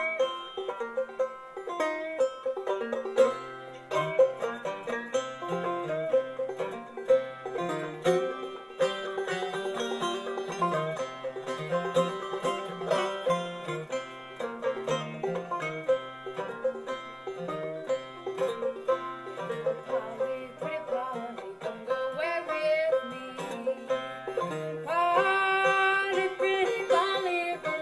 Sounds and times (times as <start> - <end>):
Music: 0.0 - 27.8.